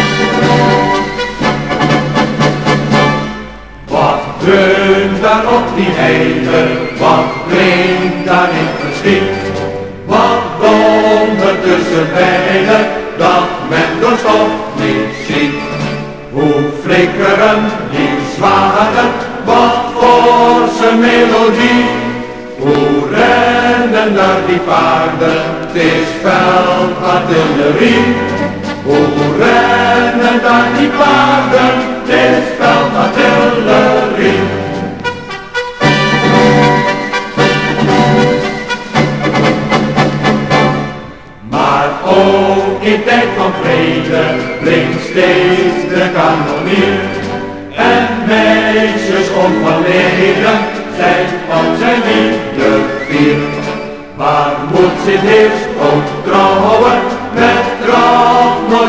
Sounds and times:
Music: 0.0 - 58.8.

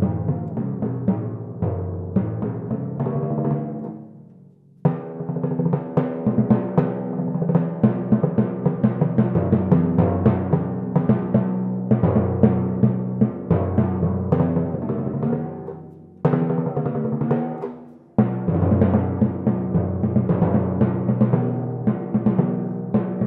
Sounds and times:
Drum kit: 0.0 - 4.1, 4.8 - 23.2
Timpani: 0.0 - 4.2, 4.9 - 23.2.

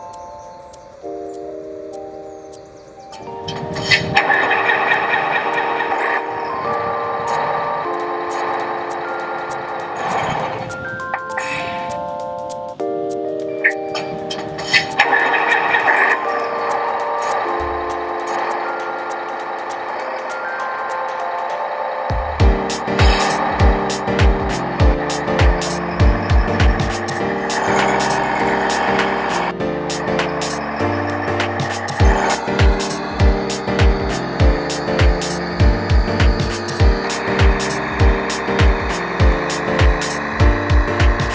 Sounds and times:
Chime: 1.4 - 29.5.

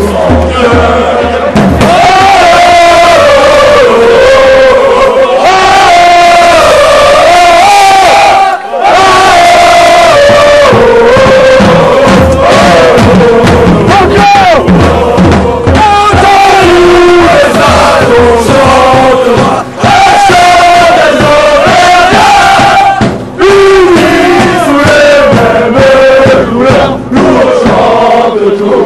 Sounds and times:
Mantra: 0.0 - 28.8.

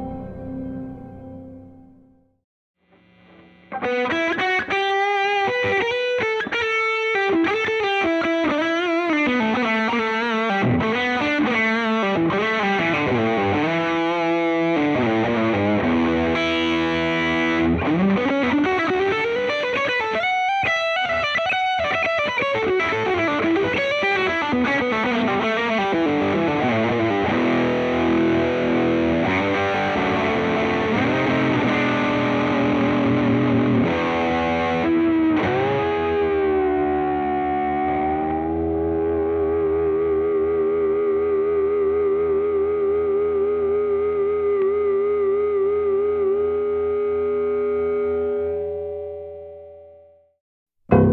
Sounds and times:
Electric guitar: 2.9 - 50.1, 50.9 - 51.1.

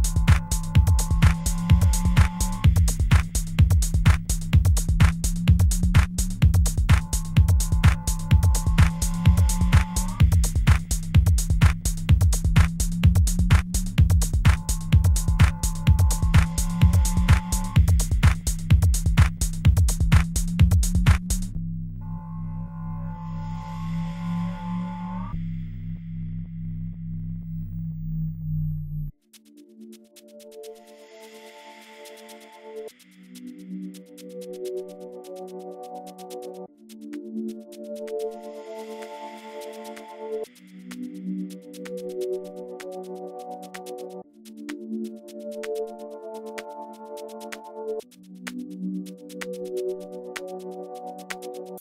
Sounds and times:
House music: 0.0 - 21.5, 29.4 - 51.8.

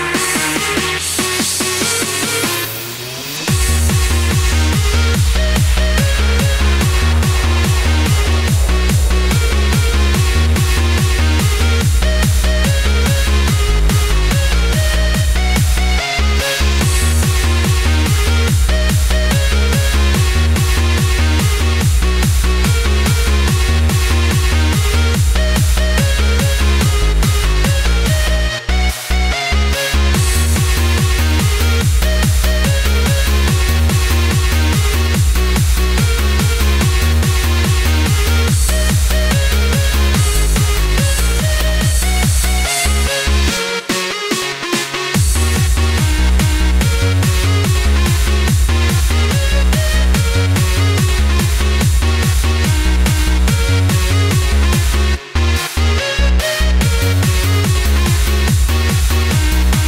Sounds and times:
Techno: 0.0 - 59.8.

